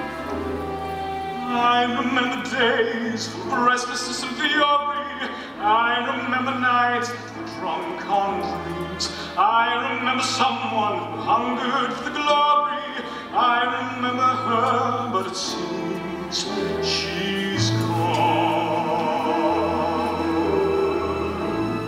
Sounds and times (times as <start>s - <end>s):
Opera: 0.0s - 21.8s.